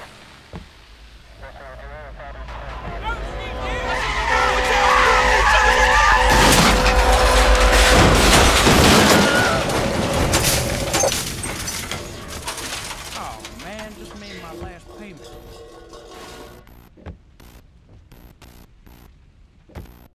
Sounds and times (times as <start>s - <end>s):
Speech: 1.4s - 4.6s, 13.2s - 15.4s.